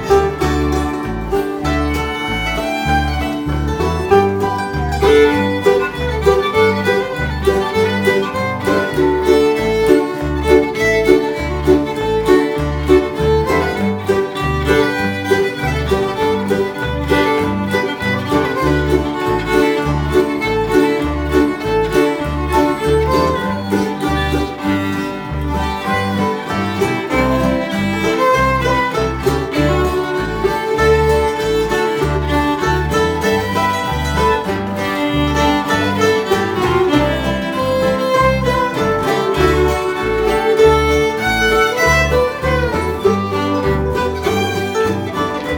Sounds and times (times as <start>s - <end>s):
Pizzicato: 0.0s - 45.5s.